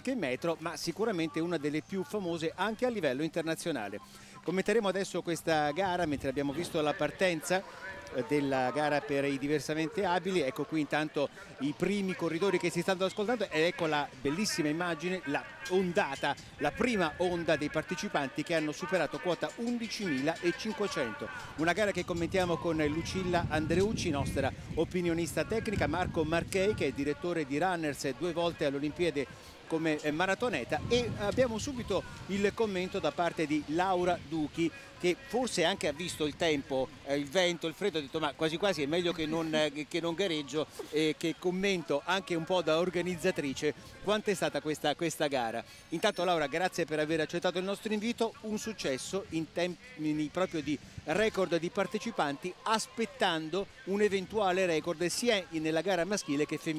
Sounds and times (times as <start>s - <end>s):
Outside, urban or manmade: 0.0s - 56.7s
Speech: 0.0s - 56.7s
Run: 0.3s - 56.7s.